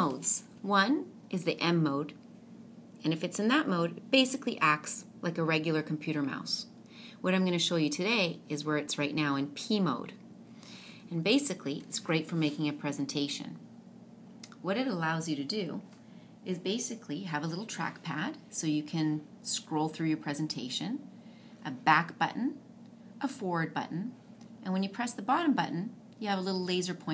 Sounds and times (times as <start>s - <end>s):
Speech: 0.0s - 2.2s, 3.0s - 10.2s, 11.1s - 13.6s, 14.6s - 15.9s, 16.5s - 21.0s, 21.6s - 22.6s, 23.2s - 27.1s.